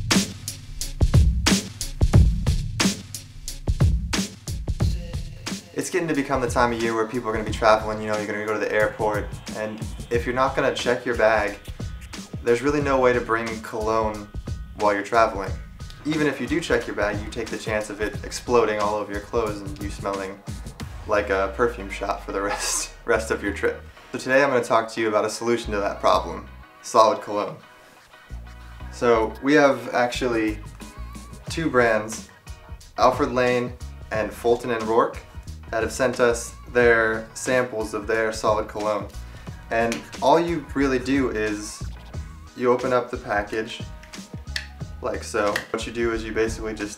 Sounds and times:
Music: 0:00.0 - 0:46.9
Speech: 0:04.8 - 0:11.6, 0:12.4 - 0:20.4, 0:21.0 - 0:27.6, 0:29.0 - 0:30.7, 0:31.5 - 0:32.3, 0:33.0 - 0:39.1, 0:39.7 - 0:41.9, 0:42.6 - 0:43.9, 0:45.0 - 0:46.9.

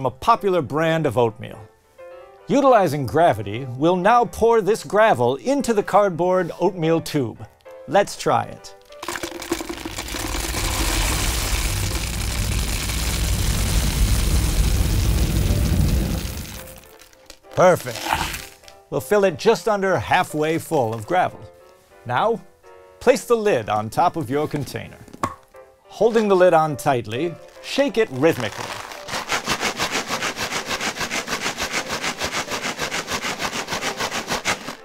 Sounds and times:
Speech: 0:00.0 - 0:01.7, 0:02.5 - 0:08.7, 0:17.6 - 0:18.1, 0:18.9 - 0:21.5, 0:22.1 - 0:22.4, 0:23.0 - 0:25.0, 0:25.9 - 0:28.5
Music: 0:00.0 - 0:34.8.

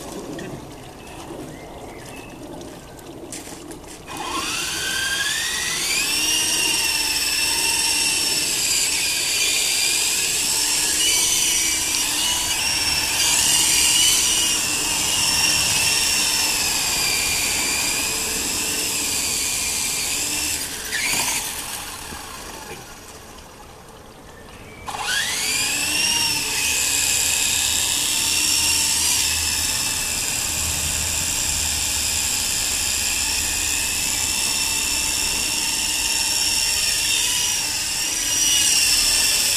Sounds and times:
Outside, rural or natural: 0:00.0 - 0:39.5.

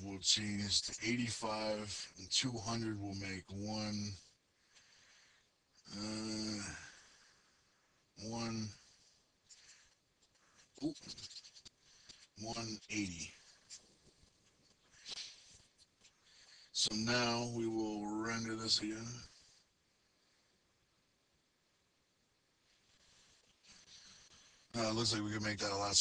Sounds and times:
Speech: 0:00.0 - 0:04.3, 0:05.9 - 0:06.9, 0:08.2 - 0:08.8, 0:10.8 - 0:11.4, 0:12.4 - 0:13.5, 0:16.7 - 0:19.4, 0:24.7 - 0:26.0.

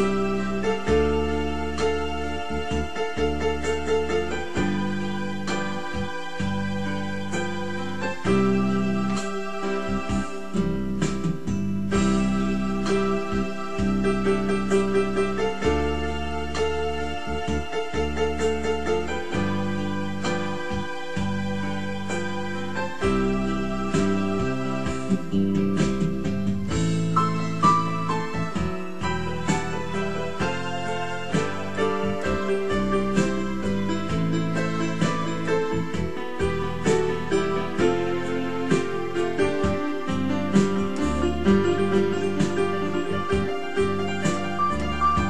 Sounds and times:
Electric piano: 0:00.0 - 0:45.3.

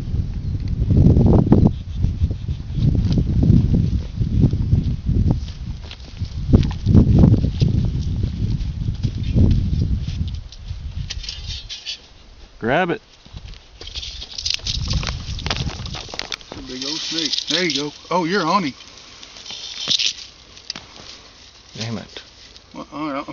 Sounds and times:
Outside, rural or natural: 0:00.0 - 0:23.3
Speech: 0:12.6 - 0:13.0, 0:16.6 - 0:18.8, 0:21.8 - 0:22.3.

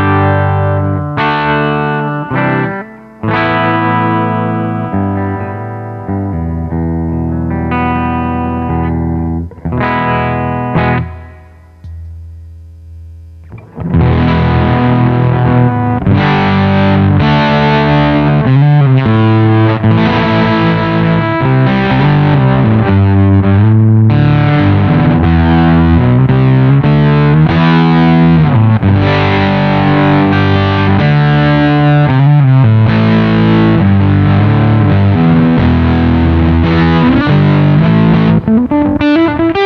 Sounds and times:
Effects unit: 0:00.0 - 0:39.6
Guitar: 0:00.0 - 0:39.6
Inside, small room: 0:00.0 - 0:39.6.

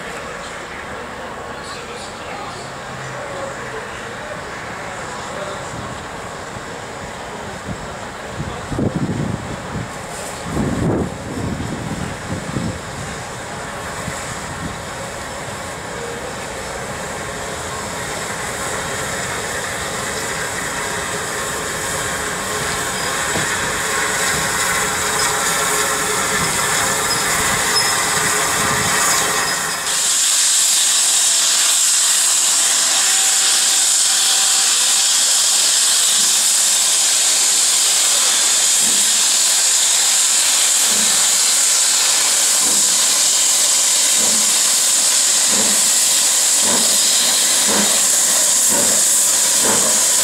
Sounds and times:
Hiss: 0:08.9 - 0:50.2.

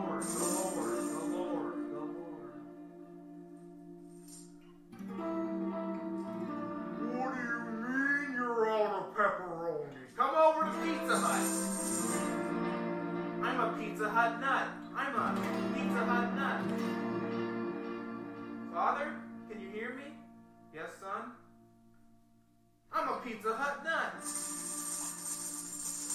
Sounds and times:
Speech: 0:00.0 - 0:02.6, 0:06.9 - 0:12.1, 0:13.4 - 0:16.7, 0:18.7 - 0:20.2, 0:20.8 - 0:21.4, 0:22.9 - 0:24.3
Music: 0:00.0 - 0:26.1.

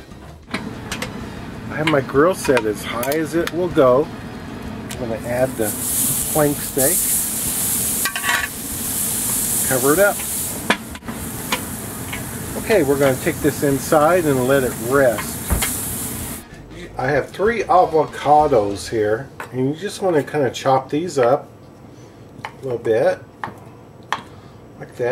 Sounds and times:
Speech: 0:01.7 - 0:04.1, 0:05.0 - 0:07.0, 0:09.7 - 0:10.2, 0:12.6 - 0:15.4, 0:16.7 - 0:21.5, 0:22.6 - 0:23.3, 0:24.8 - 0:25.1.

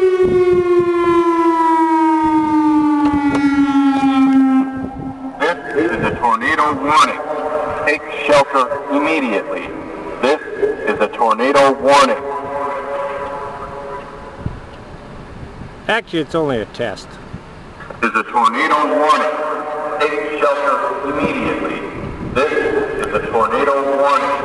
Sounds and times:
Speech: 0:05.4 - 0:07.2, 0:07.9 - 0:12.8, 0:15.9 - 0:17.2, 0:18.0 - 0:24.4.

